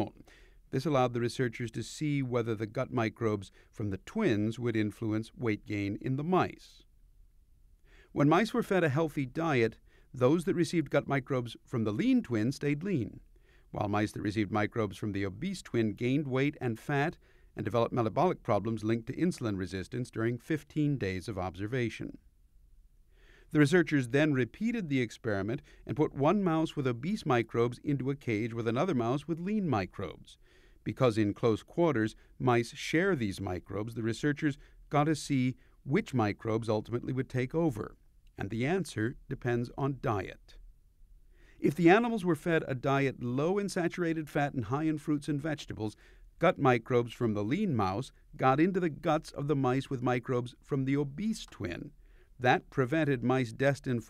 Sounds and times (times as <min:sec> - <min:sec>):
Speech: 0:00.0 - 0:06.8, 0:08.1 - 0:22.2, 0:23.5 - 0:40.6, 0:41.6 - 0:54.0.